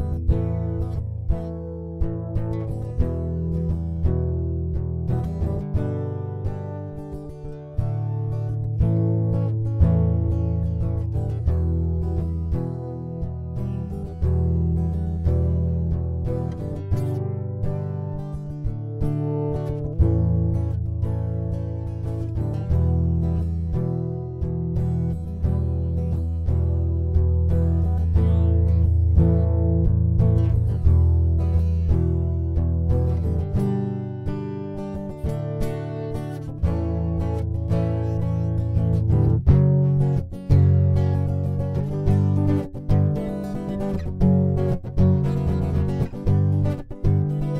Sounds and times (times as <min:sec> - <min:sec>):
Music: 0:00.0 - 0:47.5.